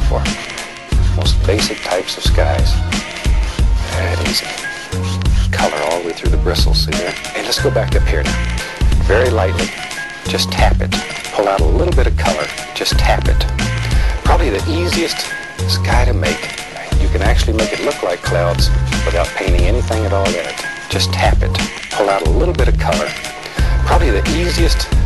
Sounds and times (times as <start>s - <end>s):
Speech: 0.0s - 0.4s, 1.2s - 2.8s, 3.9s - 4.6s, 5.5s - 8.4s, 9.1s - 9.7s, 10.3s - 13.5s, 14.2s - 23.2s, 23.9s - 24.9s
Music: 0.0s - 25.0s.